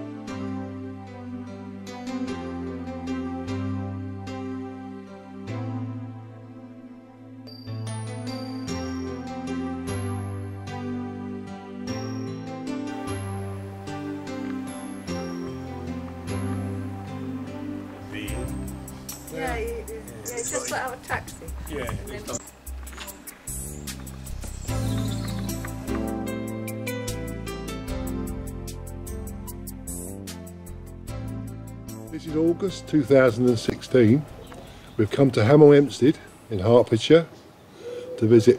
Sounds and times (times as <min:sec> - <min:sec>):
Music: 0:00.0 - 0:36.1
Speech: 0:19.3 - 0:22.5, 0:32.1 - 0:34.3, 0:35.0 - 0:37.4, 0:38.2 - 0:38.5
Bird: 0:23.9 - 0:25.9, 0:37.4 - 0:38.5.